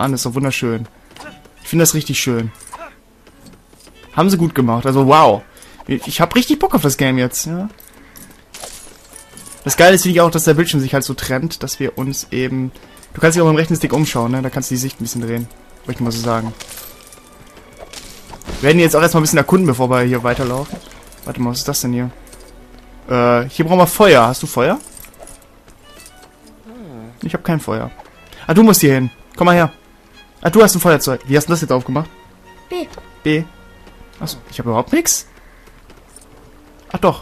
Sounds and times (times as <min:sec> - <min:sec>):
Music: 0:00.0 - 0:37.2
Speech: 0:04.2 - 0:07.7, 0:18.6 - 0:22.1.